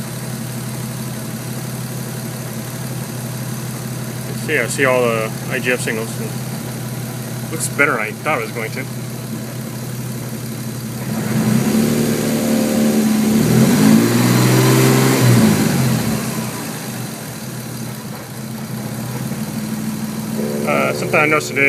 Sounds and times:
Medium engine (mid frequency): 0.0s - 20.4s
Vehicle: 0.0s - 20.6s
Speech: 4.3s - 6.3s, 7.5s - 8.9s, 20.4s - 21.6s.

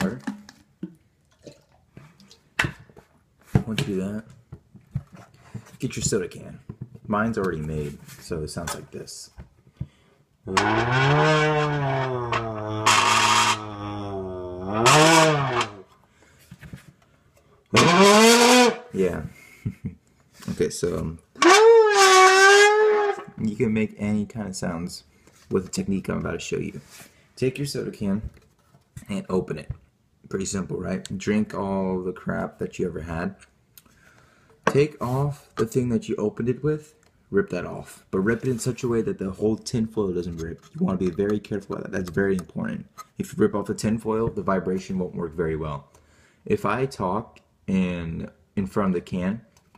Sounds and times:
Speech: 0.0s - 0.3s, 3.6s - 4.3s, 5.8s - 9.4s, 10.5s - 10.9s, 19.0s - 19.4s, 20.5s - 21.2s, 23.4s - 26.8s, 27.4s - 28.4s, 29.0s - 33.4s, 34.7s - 45.9s, 46.5s - 49.5s.

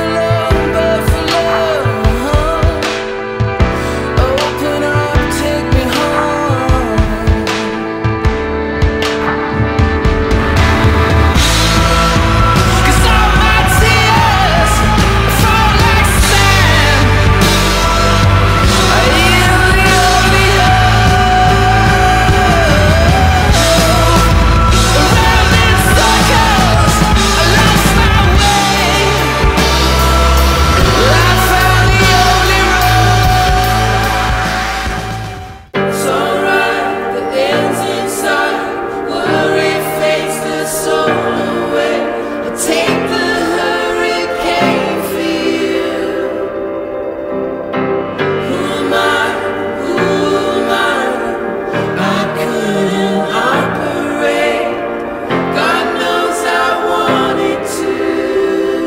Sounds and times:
Music: 0.0s - 58.8s.

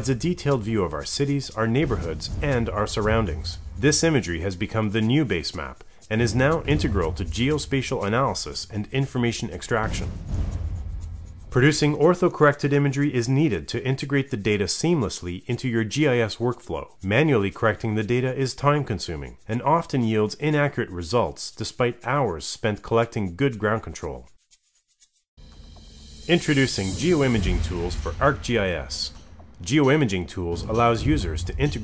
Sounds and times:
Speech: 0.0s - 10.1s, 11.6s - 24.3s, 26.3s - 31.8s
Music: 0.0s - 24.4s, 25.4s - 31.8s.

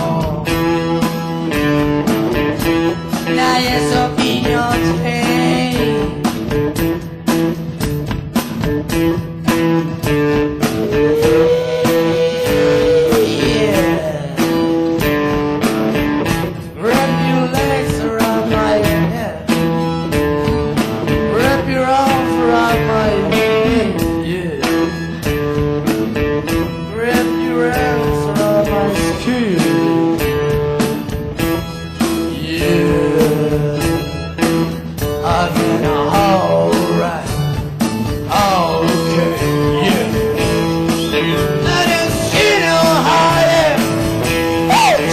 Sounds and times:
Musical instrument: 0.0s - 45.1s
Rock music: 0.0s - 45.1s
Singing: 3.3s - 6.3s, 10.8s - 14.8s, 16.8s - 19.5s, 21.3s - 24.9s, 26.9s - 30.2s, 32.3s - 34.2s, 35.2s - 37.5s, 38.3s - 44.1s, 44.7s - 45.1s.

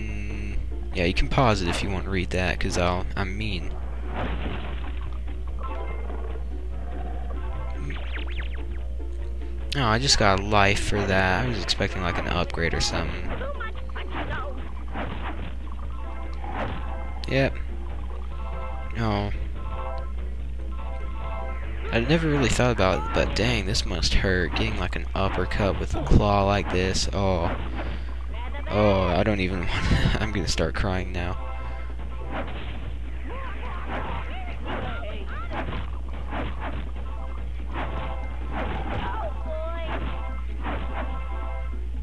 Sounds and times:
Speech: 9.8s - 14.6s, 21.9s - 27.5s.

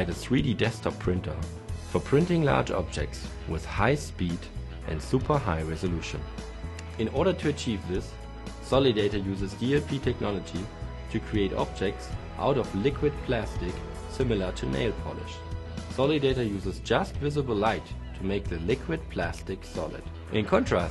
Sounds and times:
Speech: 0.0s - 6.3s, 7.0s - 20.9s
Music: 0.0s - 20.9s.

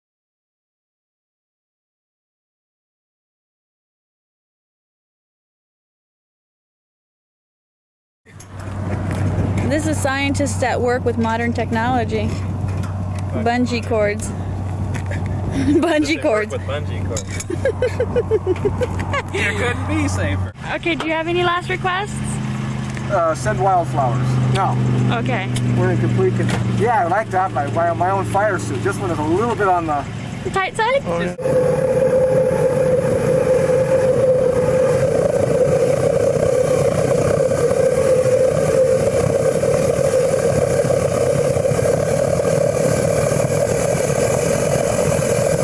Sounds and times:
Speech: 23.1s - 31.4s.

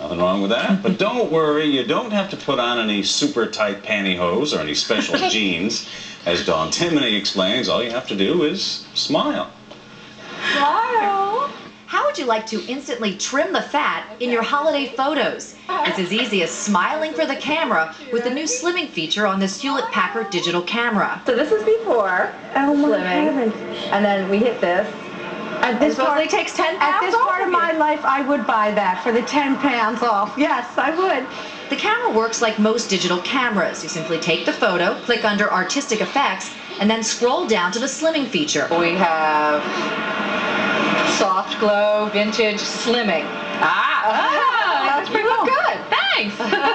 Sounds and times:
Speech: 0.0s - 9.6s, 10.6s - 24.9s.

